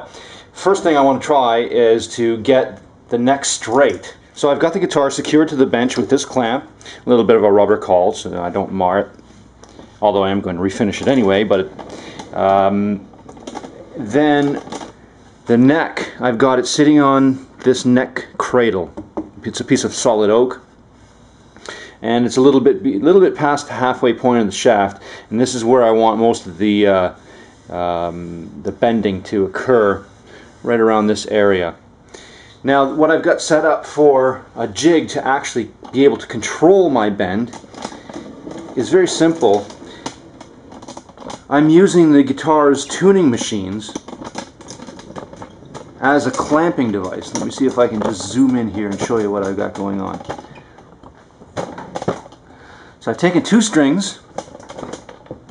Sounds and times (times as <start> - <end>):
Speech: 0.0 - 9.2, 10.0 - 13.1, 13.9 - 14.7, 15.5 - 20.7, 22.0 - 31.8, 32.6 - 37.6, 38.8 - 39.8, 41.5 - 44.1, 46.0 - 50.4, 53.0 - 54.3
Inside, small room: 0.0 - 55.5.